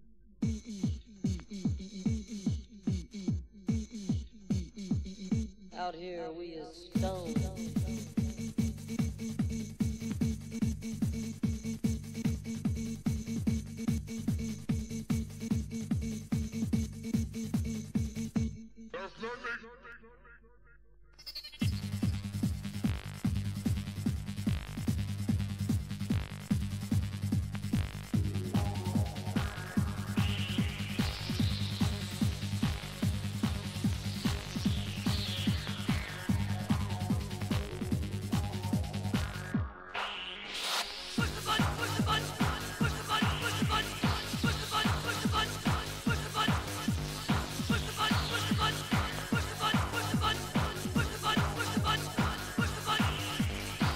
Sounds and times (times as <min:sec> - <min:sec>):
Techno: 0:00.4 - 0:19.9, 0:21.2 - 0:53.9.